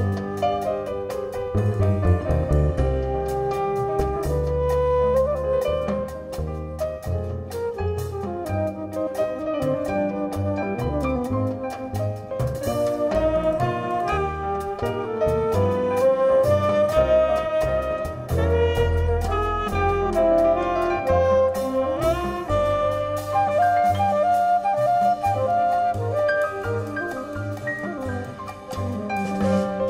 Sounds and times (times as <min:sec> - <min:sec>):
Jazz: 0:00.0 - 0:29.8.